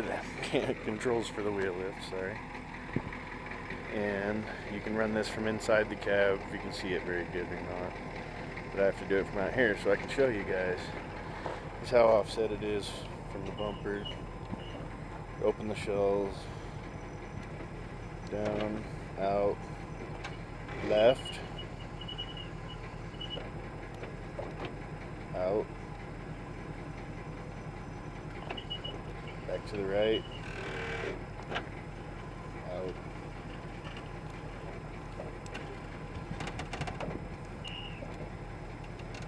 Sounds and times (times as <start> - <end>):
Speech: 0.0 - 2.4, 3.9 - 8.0, 8.7 - 11.0, 11.8 - 14.1, 15.4 - 16.5, 18.3 - 19.6, 20.7 - 21.5, 25.3 - 25.7, 29.5 - 30.2, 32.6 - 33.0
Vehicle: 0.0 - 39.2.